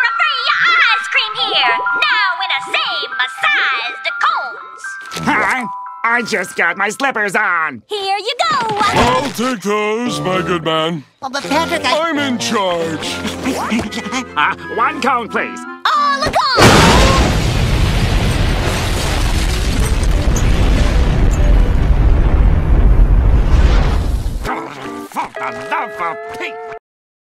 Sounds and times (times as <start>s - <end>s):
Music: 0.0s - 7.7s, 9.1s - 16.6s, 19.8s - 21.9s, 24.5s - 26.8s
Explosion: 16.6s - 24.5s.